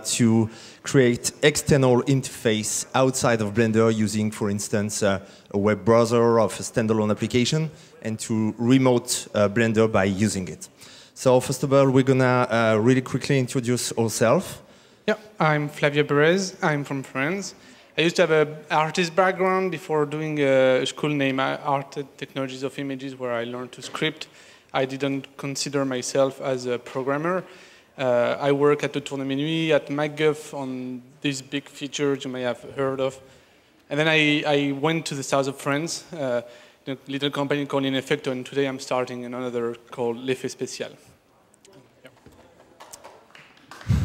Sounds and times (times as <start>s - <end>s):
Speech: 0.0s - 33.2s, 33.9s - 42.5s.